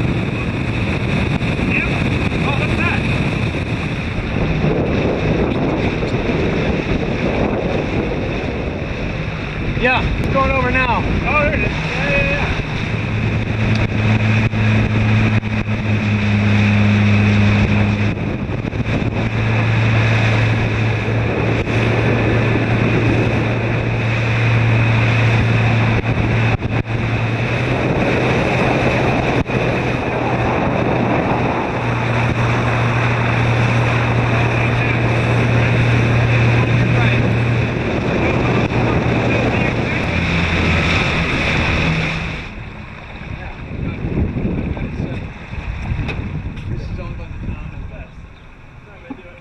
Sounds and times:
Speech: 1.7s - 3.0s, 9.8s - 12.5s, 34.3s - 37.3s, 43.3s - 44.1s, 46.7s - 48.2s, 48.8s - 49.4s.

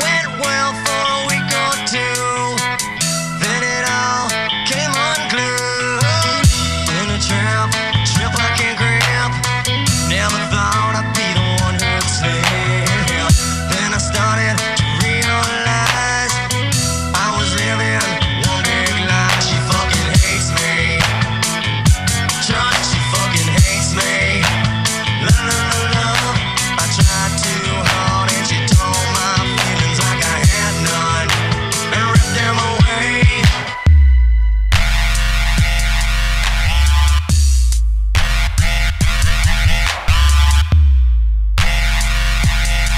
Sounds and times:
Dubstep: 0.0s - 40.9s, 41.6s - 42.9s.

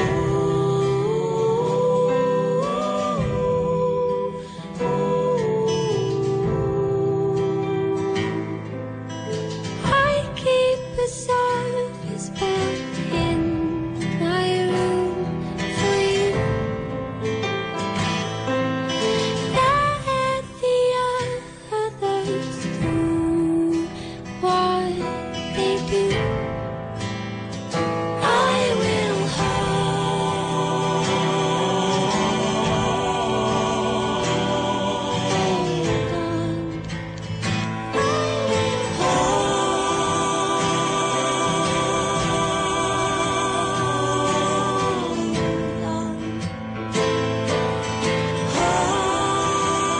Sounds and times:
Music: 0.0s - 49.9s.

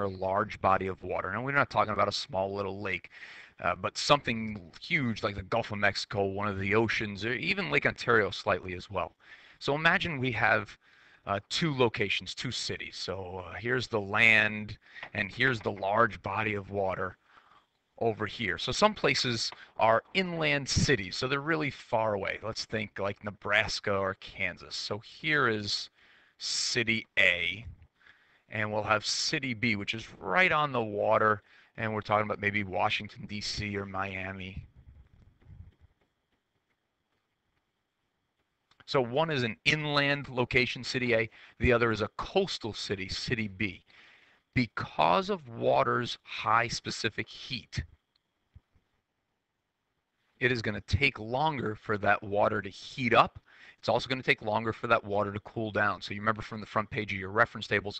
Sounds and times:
Speech: 0.0s - 17.2s, 18.0s - 27.8s, 28.5s - 34.7s, 38.9s - 43.8s, 44.6s - 47.9s, 50.4s - 57.9s.

